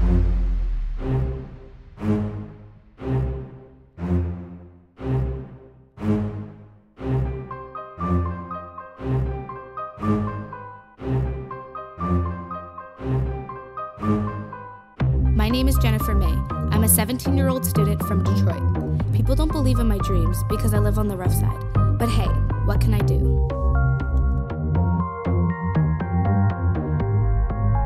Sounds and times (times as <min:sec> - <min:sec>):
Music: 0:00.0 - 0:27.8
Speech: 0:15.4 - 0:23.4.